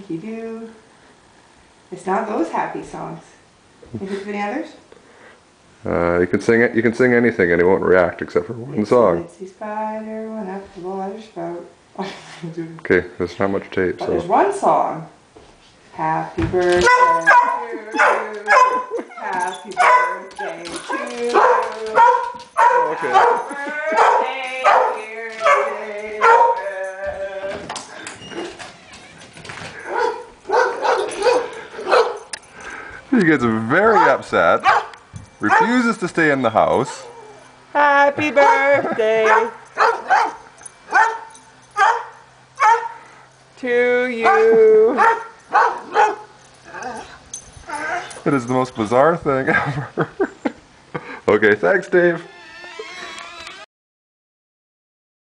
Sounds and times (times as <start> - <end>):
Bow-wow: 16.8 - 18.9, 21.4 - 26.6, 29.9 - 32.2, 33.9 - 35.8, 39.3 - 41.2, 41.8 - 43.0.